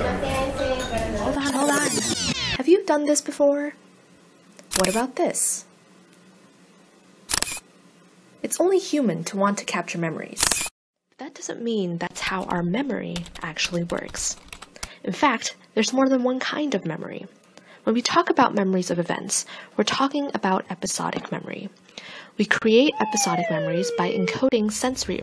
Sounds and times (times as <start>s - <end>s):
Speech: 0.0s - 3.8s, 4.8s - 5.7s, 8.4s - 10.4s, 11.2s - 14.4s, 15.0s - 21.8s, 22.4s - 25.2s.